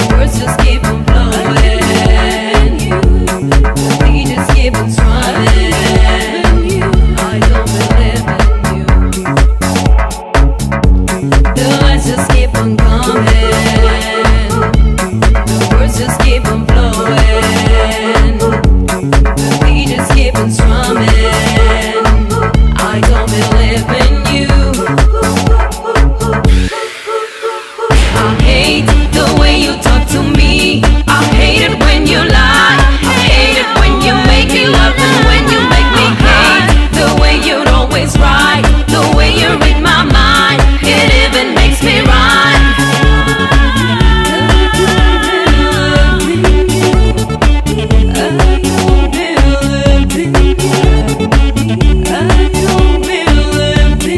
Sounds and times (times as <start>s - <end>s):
Afrobeat: 0.0s - 54.1s.